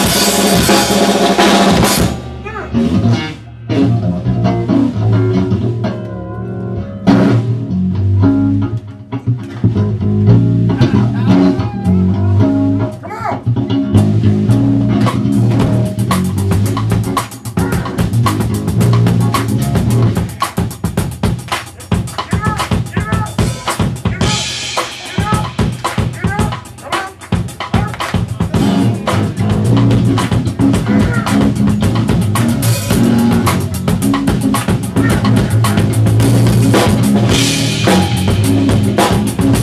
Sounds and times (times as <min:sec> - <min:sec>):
Drum roll: 0:00.0 - 0:03.1, 0:14.0 - 0:39.6
Bass drum: 0:00.0 - 0:05.9, 0:09.5 - 0:39.6
Drum kit: 0:00.0 - 0:39.6.